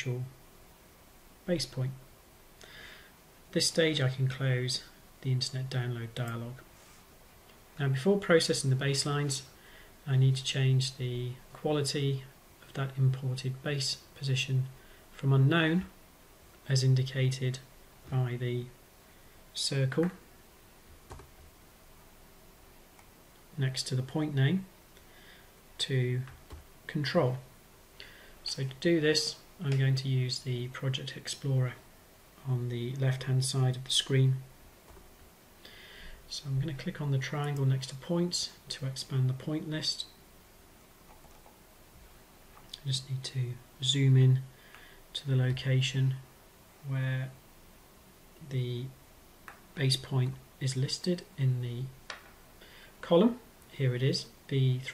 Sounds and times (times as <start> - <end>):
Speech: 0.0 - 0.4, 1.5 - 2.0, 3.5 - 6.6, 7.8 - 15.9, 16.6 - 18.8, 19.6 - 20.2, 23.6 - 24.7, 25.8 - 27.5, 28.4 - 31.8, 32.4 - 34.5, 36.3 - 40.2, 42.7 - 44.5, 45.2 - 46.2, 46.8 - 47.4, 48.4 - 49.0, 49.8 - 52.0, 53.0 - 54.9.